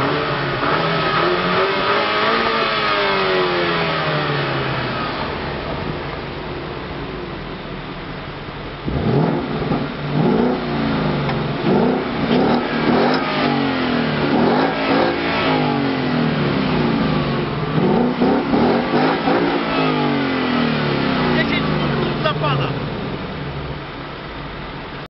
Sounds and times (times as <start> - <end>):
Speech: 21.3 - 22.8.